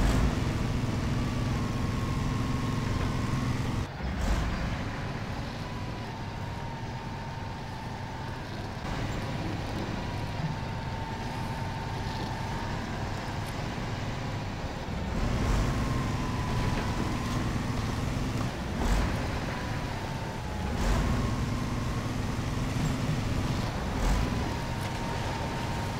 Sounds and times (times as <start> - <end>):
Vehicle: 0.0 - 26.0.